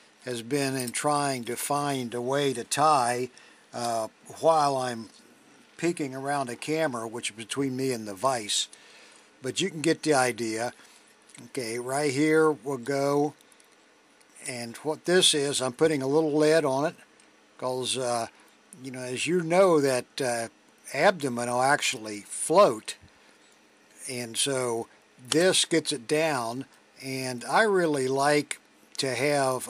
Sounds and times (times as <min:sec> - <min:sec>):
Speech: 0:00.2 - 0:05.2, 0:05.8 - 0:08.8, 0:09.4 - 0:10.8, 0:11.4 - 0:13.4, 0:14.4 - 0:17.0, 0:17.6 - 0:23.0, 0:24.0 - 0:29.6.